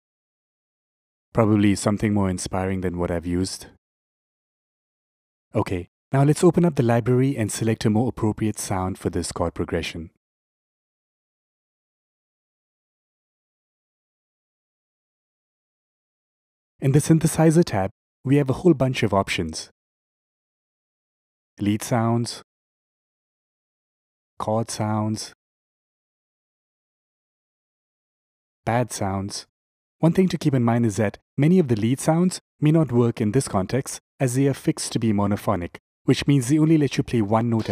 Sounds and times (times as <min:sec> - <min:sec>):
Speech: 0:01.4 - 0:03.8, 0:05.6 - 0:10.2, 0:16.8 - 0:19.7, 0:21.6 - 0:22.5, 0:24.4 - 0:25.4, 0:28.7 - 0:37.7.